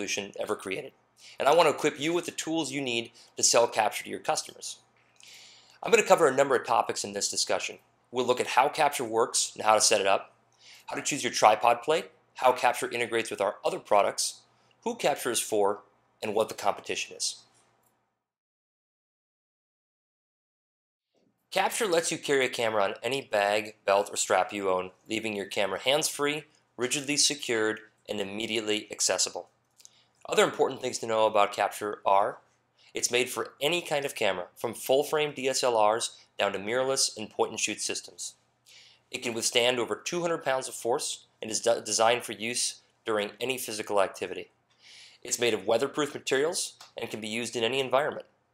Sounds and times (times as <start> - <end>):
Speech: 0.0 - 4.8, 5.8 - 10.3, 10.9 - 17.5, 21.6 - 29.5, 30.3 - 32.4, 33.0 - 38.4, 39.2 - 44.5, 45.2 - 48.3.